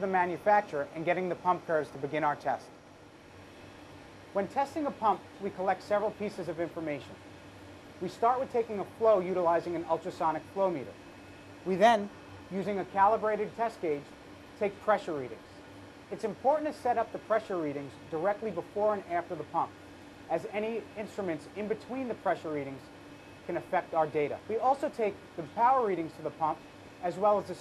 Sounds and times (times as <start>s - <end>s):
Speech: 0.0s - 2.7s, 4.4s - 7.2s, 8.0s - 11.0s, 11.7s - 15.4s, 16.1s - 22.9s, 23.5s - 27.6s.